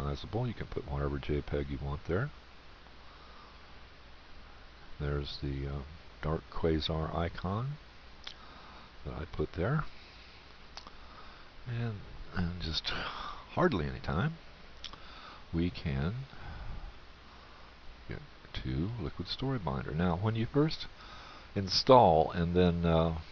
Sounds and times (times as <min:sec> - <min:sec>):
Speech: 0:00.0 - 0:02.4, 0:05.0 - 0:07.8, 0:09.0 - 0:09.9, 0:11.7 - 0:14.4, 0:15.5 - 0:16.4, 0:18.1 - 0:20.9, 0:21.6 - 0:23.3.